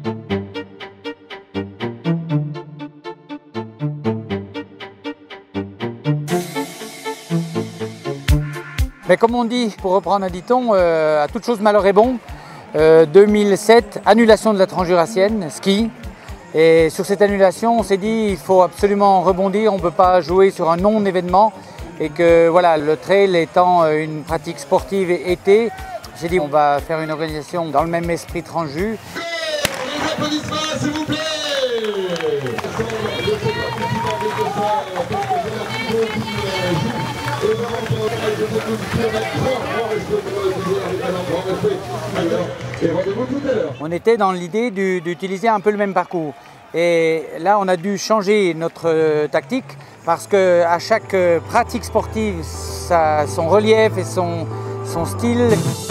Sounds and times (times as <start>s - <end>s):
Music: 0.0s - 46.1s, 46.8s - 55.9s
Outside, urban or manmade: 0.0s - 55.9s
Speech: 9.1s - 12.2s, 12.8s - 55.8s.